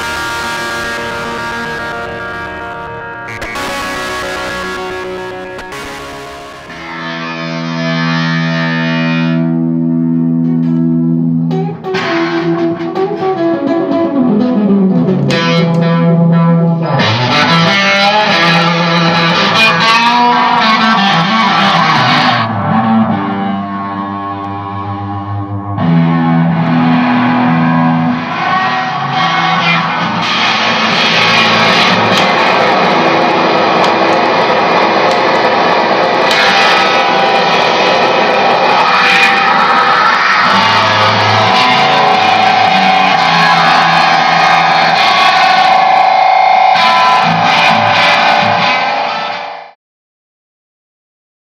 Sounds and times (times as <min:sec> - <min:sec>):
Music: 0:00.0 - 0:49.8.